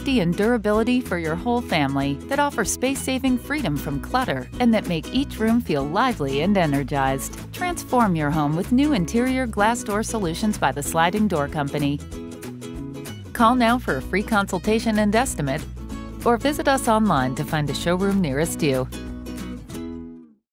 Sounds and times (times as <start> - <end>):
Speech: 0.0 - 12.0, 13.4 - 15.6, 16.2 - 18.9
Music: 0.0 - 20.5.